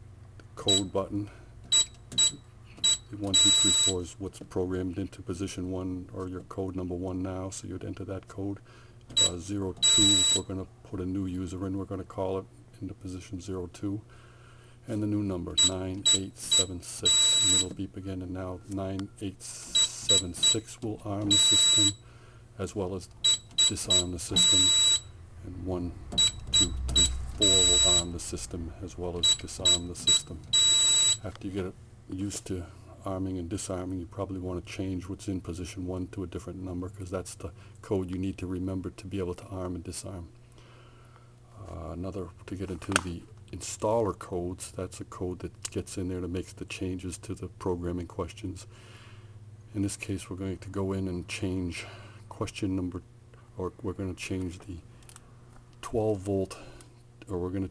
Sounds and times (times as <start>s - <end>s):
Speech: 0.6s - 1.4s, 3.1s - 8.6s, 9.2s - 14.1s, 14.9s - 22.0s, 22.6s - 23.1s, 23.7s - 26.0s, 26.6s - 30.5s, 31.2s - 40.3s, 41.5s - 48.7s, 49.7s - 54.8s, 55.8s - 57.7s.